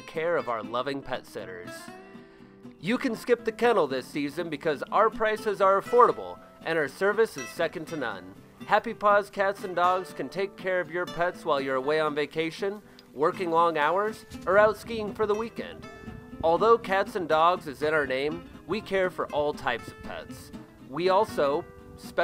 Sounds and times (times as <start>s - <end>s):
Speech: 0.0s - 1.9s, 2.8s - 15.8s, 16.4s - 22.2s
Music: 0.0s - 22.2s.